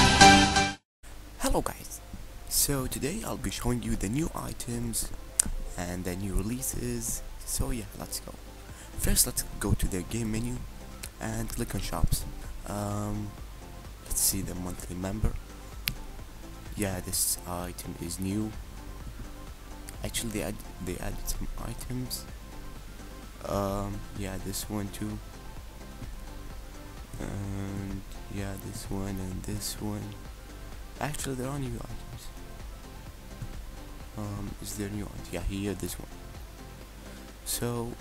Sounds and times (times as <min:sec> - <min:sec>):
Music: 0:00.0 - 0:38.0
Speech: 0:01.4 - 0:05.1, 0:05.8 - 0:08.4, 0:09.0 - 0:13.3, 0:14.1 - 0:15.4, 0:16.7 - 0:18.6, 0:19.9 - 0:22.3, 0:23.4 - 0:25.2, 0:27.2 - 0:30.2, 0:31.0 - 0:32.4, 0:34.2 - 0:36.1, 0:37.5 - 0:38.0.